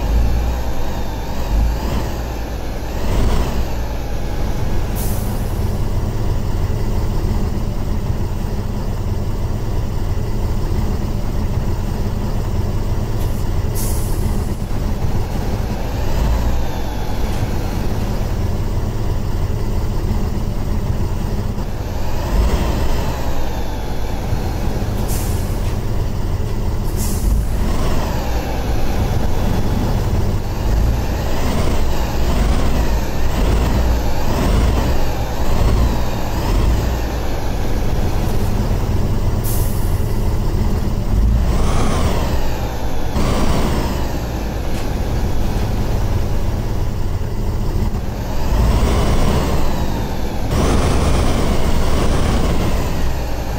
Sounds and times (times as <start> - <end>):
Truck: 0.0 - 53.5.